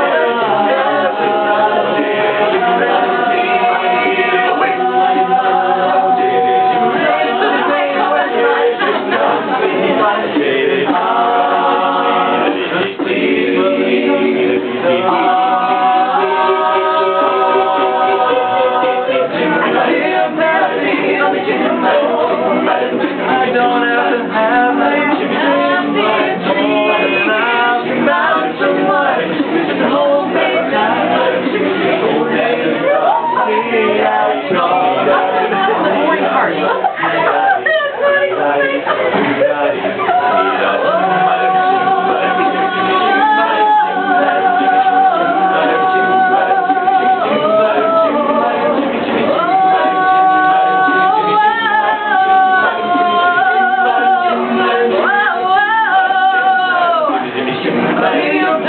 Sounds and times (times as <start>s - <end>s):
Male singing: 0.0s - 58.6s
Vocal music: 0.0s - 58.6s
Speech: 19.2s - 44.5s.